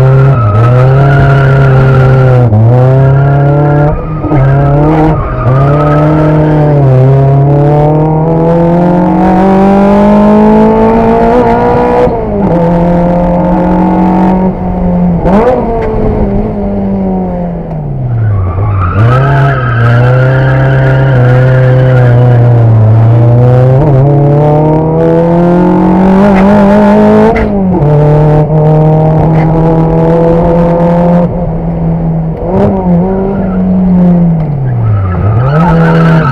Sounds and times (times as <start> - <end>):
Tire squeal: 0.0 - 6.9, 18.1 - 22.6, 33.0 - 36.3.